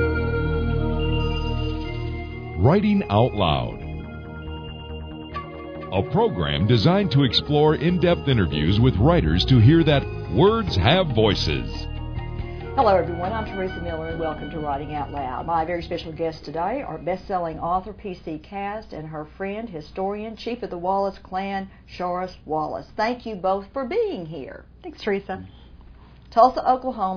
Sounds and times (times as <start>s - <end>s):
Music: 0.0s - 18.4s
Speech: 2.6s - 3.8s, 6.0s - 11.9s, 12.8s - 25.5s, 26.3s - 27.1s.